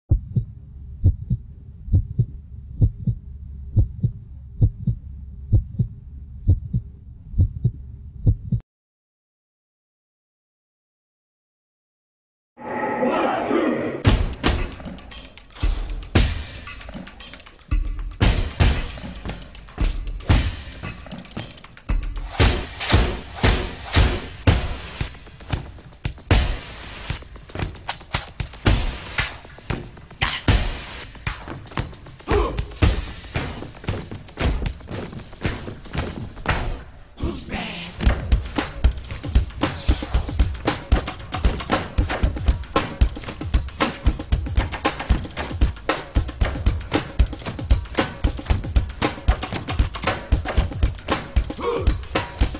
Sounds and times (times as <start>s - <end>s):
Heart sounds, heartbeat: 0.1s - 3.2s, 3.8s - 5.9s, 6.5s - 6.8s, 7.4s - 8.6s.